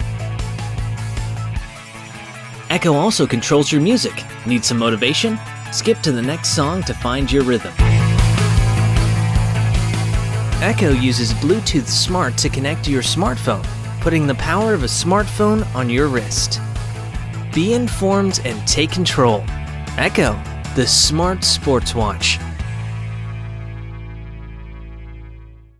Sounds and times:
Music: 0.0 - 25.7
Speech: 2.7 - 7.8, 10.6 - 16.6, 17.6 - 22.4.

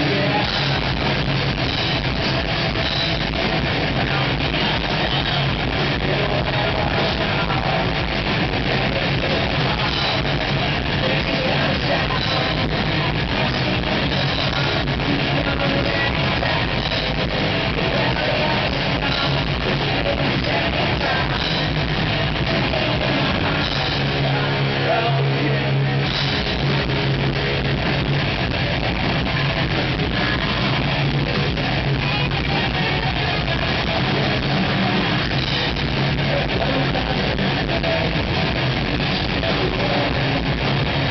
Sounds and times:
Music: 0.0 - 41.1.

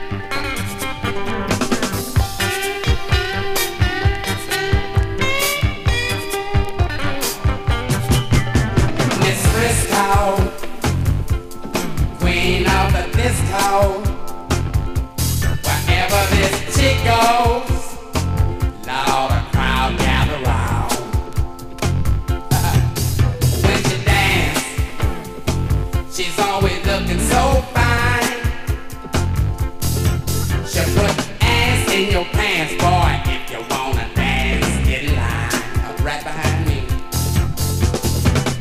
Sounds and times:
Music: 0.0 - 38.6.

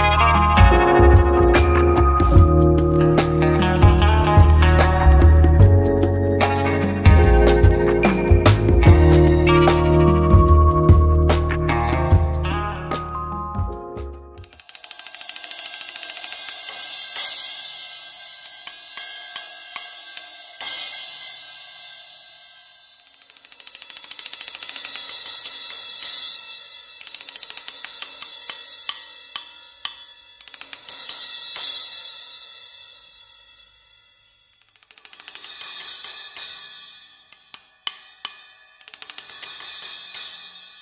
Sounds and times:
Music: 0.0 - 40.8.

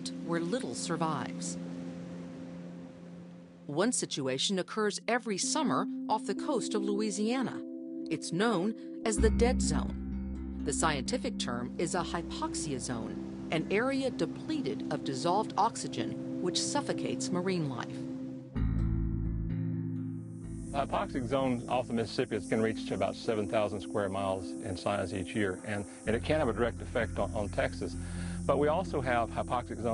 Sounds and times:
Speech: 0.0 - 1.6, 3.7 - 9.9, 10.7 - 18.0, 20.8 - 29.9
Music: 0.0 - 29.9.

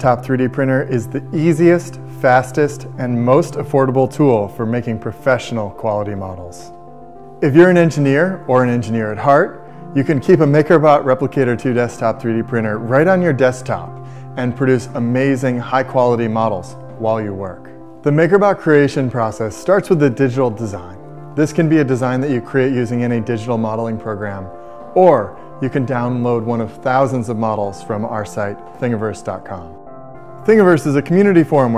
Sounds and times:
Speech: 0.0 - 6.7, 7.4 - 29.8, 30.4 - 31.7
Music: 0.0 - 31.7.

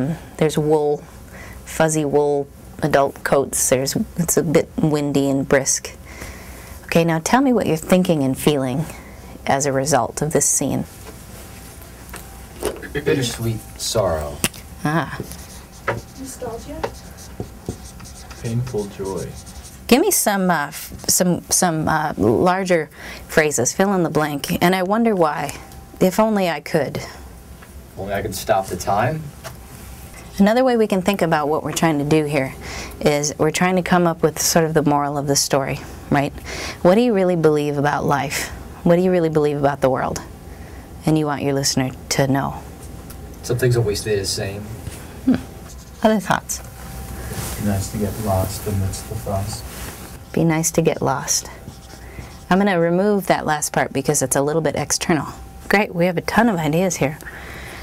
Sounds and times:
Writing: 15.2 - 21.2, 51.4 - 52.8.

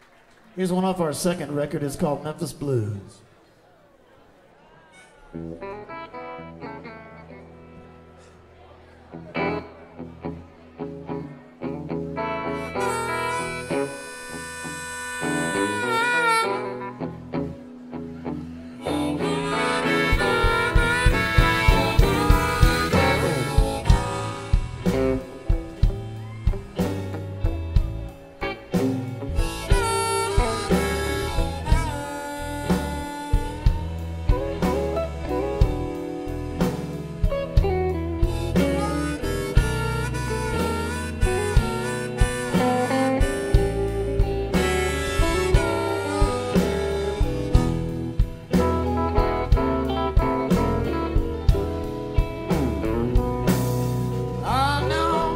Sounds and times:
Country: 5.3 - 55.3.

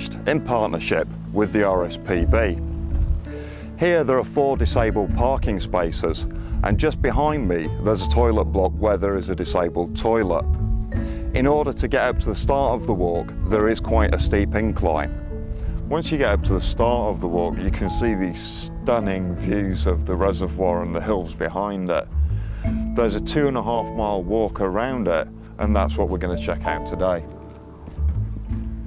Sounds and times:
Speech: 0.0 - 2.6, 3.8 - 10.4, 11.4 - 15.1, 15.9 - 22.1, 23.0 - 27.3
Music: 0.0 - 28.8.

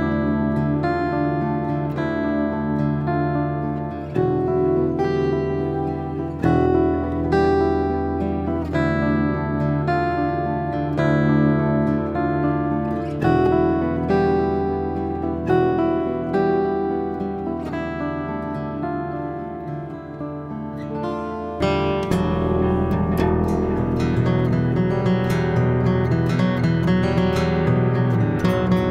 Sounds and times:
Strum: 0.0 - 28.9.

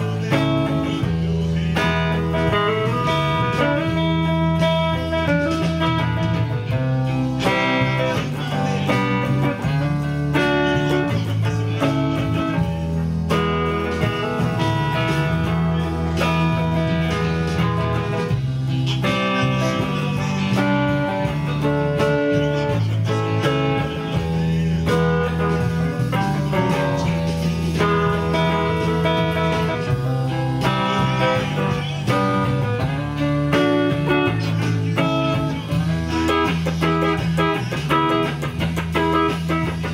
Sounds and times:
Speech: 0.0 - 38.3
Music: 0.0 - 39.9.

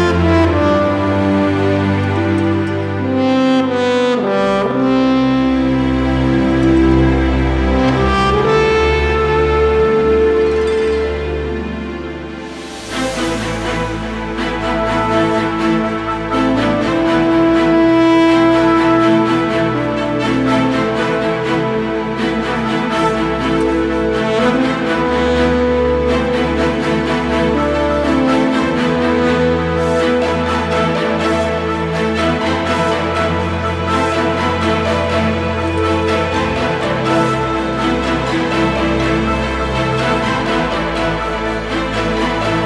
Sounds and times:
Music: 0.0 - 42.6.

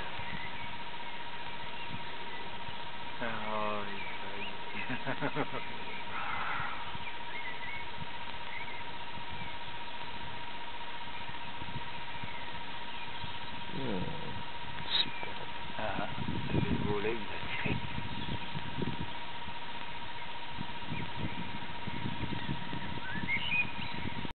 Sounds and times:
Bird: 0.0 - 10.2, 11.1 - 19.2, 20.1 - 24.3
Speech: 3.2 - 4.5, 13.8 - 17.8.

